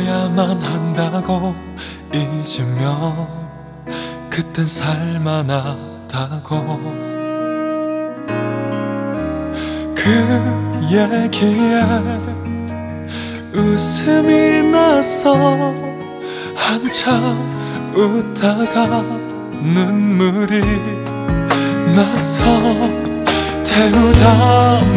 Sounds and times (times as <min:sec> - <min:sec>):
Background music: 0:00.0 - 0:24.9.